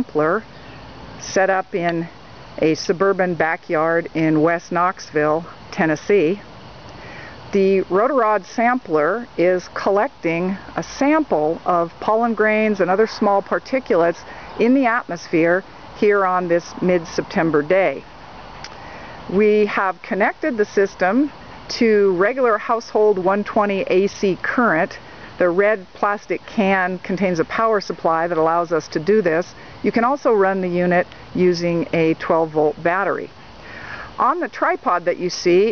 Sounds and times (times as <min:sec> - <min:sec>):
Speech: 0:00.0 - 0:00.4, 0:01.2 - 0:06.4, 0:07.6 - 0:18.0, 0:19.3 - 0:33.3, 0:34.1 - 0:35.7.